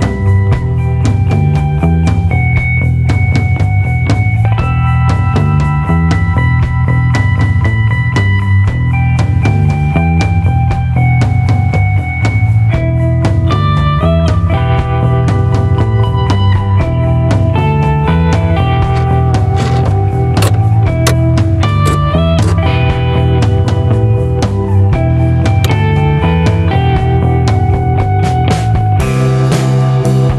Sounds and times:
Music: 0.0s - 30.3s.

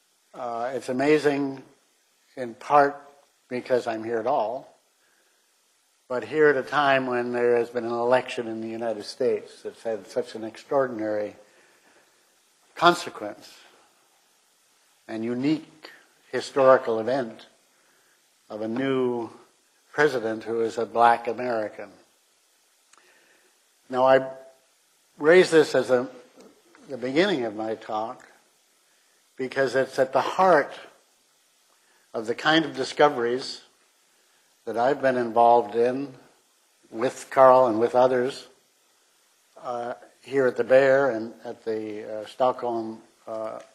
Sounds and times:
Speech: 0.4s - 1.7s, 2.4s - 4.8s, 6.1s - 11.4s, 12.8s - 13.7s, 15.1s - 17.6s, 18.5s - 22.1s, 23.9s - 24.5s, 25.2s - 28.4s, 29.4s - 31.0s, 32.2s - 33.7s, 34.6s - 38.6s, 39.6s - 43.7s.

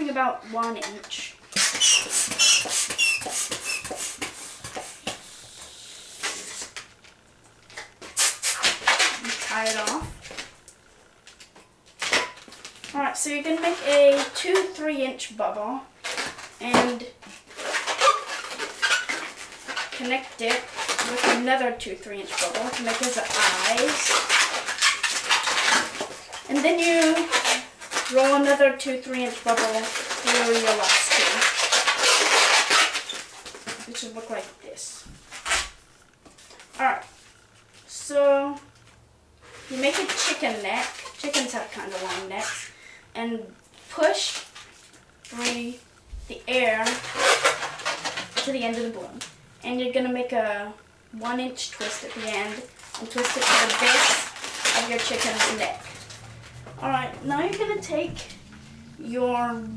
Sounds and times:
Speech: 0.0s - 1.4s, 9.2s - 10.2s, 12.9s - 15.9s, 16.6s - 17.2s, 20.0s - 24.1s, 26.5s - 27.4s, 28.1s - 31.4s, 33.8s - 35.0s, 36.8s - 37.1s, 37.9s - 38.7s, 39.7s - 44.4s, 45.3s - 47.0s, 48.4s - 55.8s, 56.8s - 58.3s, 59.0s - 59.7s.

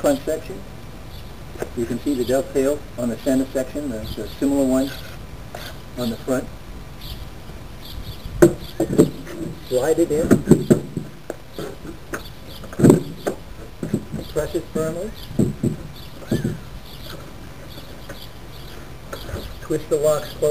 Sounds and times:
Speech: 0.0s - 0.7s, 1.8s - 5.0s, 6.0s - 6.5s, 9.6s - 10.4s, 14.2s - 15.2s, 19.6s - 20.5s.

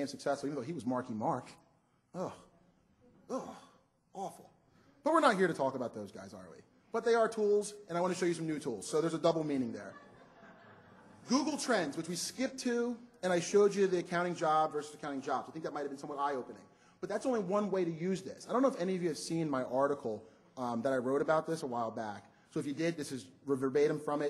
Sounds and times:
Speech: 0.0s - 1.6s, 2.2s - 2.5s, 3.3s - 10.0s, 11.3s - 24.3s.

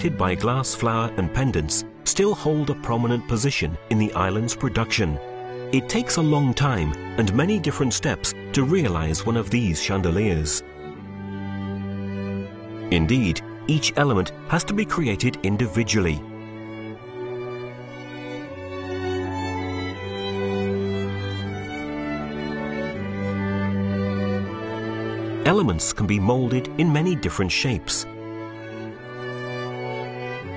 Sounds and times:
Speech: 0.0s - 5.2s, 5.8s - 10.6s, 12.9s - 16.2s, 25.4s - 28.1s
Music: 0.0s - 30.5s.

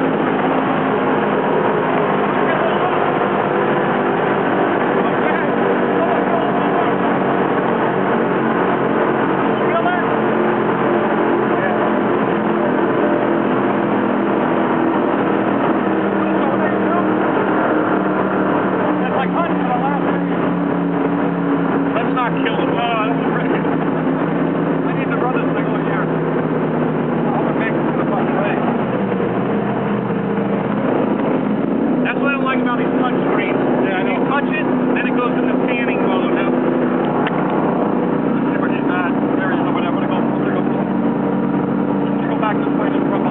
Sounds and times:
Motorboat, speedboat: 0.0s - 43.3s
Speech: 2.4s - 3.2s, 4.9s - 7.2s, 9.6s - 10.3s, 11.4s - 13.3s, 16.2s - 17.2s, 19.0s - 20.3s, 21.9s - 23.7s, 24.8s - 26.1s, 27.2s - 28.7s, 32.0s - 36.6s, 38.4s - 40.8s, 42.1s - 43.3s.

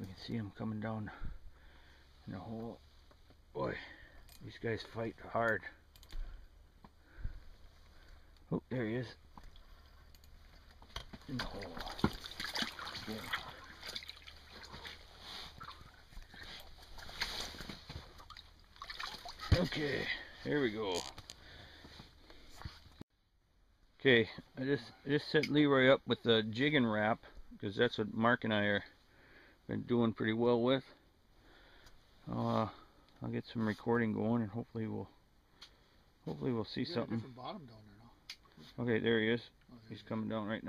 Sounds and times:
Speech: 0.0s - 1.2s, 2.3s - 2.8s, 3.6s - 5.8s, 8.5s - 9.2s, 11.3s - 12.0s, 19.5s - 21.1s, 24.0s - 28.9s, 29.7s - 31.0s, 32.3s - 35.2s, 36.2s - 40.6s.

